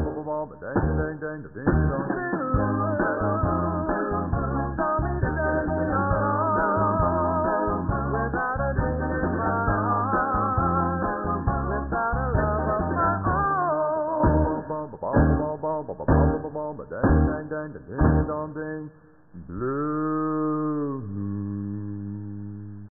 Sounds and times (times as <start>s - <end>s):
Music: 0.0s - 18.5s.